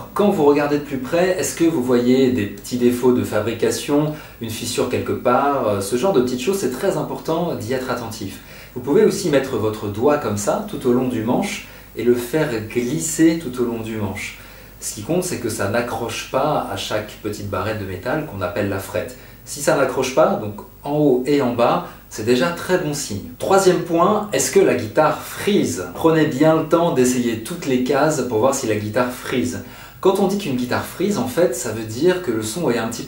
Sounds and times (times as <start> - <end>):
Speech: 0.0 - 33.0.